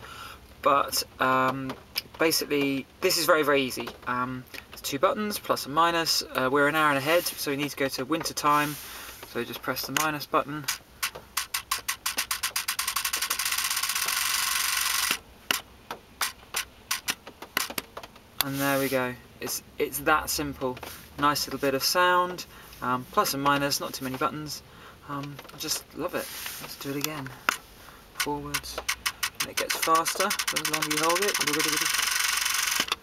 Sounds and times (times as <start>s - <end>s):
Speech: 0.6s - 10.7s, 18.4s - 27.4s, 28.2s - 28.8s, 29.4s - 31.9s.